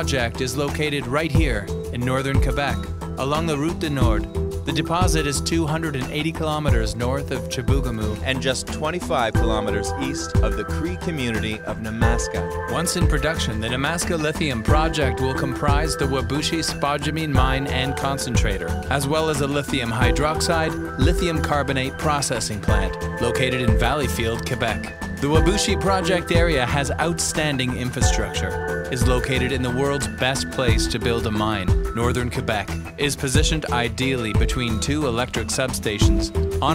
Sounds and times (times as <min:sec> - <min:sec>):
Music: 0:00.0 - 0:36.7
Speech: 0:00.0 - 0:36.7.